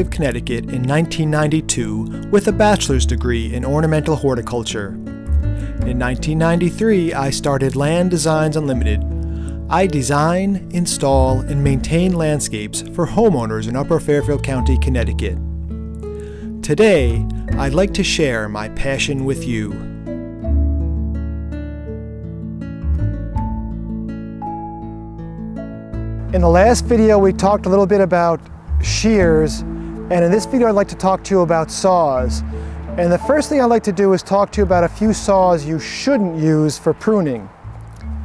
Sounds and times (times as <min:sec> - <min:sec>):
Speech: 0:00.0 - 0:05.0, 0:05.8 - 0:09.0, 0:09.7 - 0:15.4, 0:16.6 - 0:19.9, 0:26.3 - 0:37.5
Music: 0:00.0 - 0:38.2.